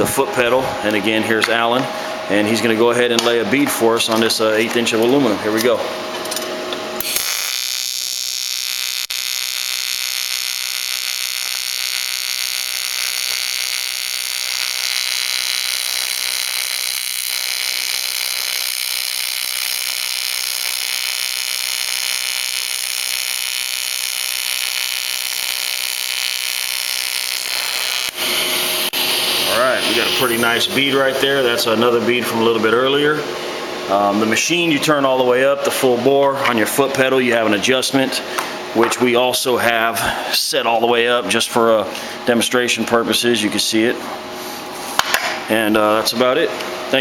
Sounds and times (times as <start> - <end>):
Speech: 0.0 - 5.9, 29.5 - 33.3, 33.9 - 38.2, 38.8 - 44.0, 45.5 - 47.0.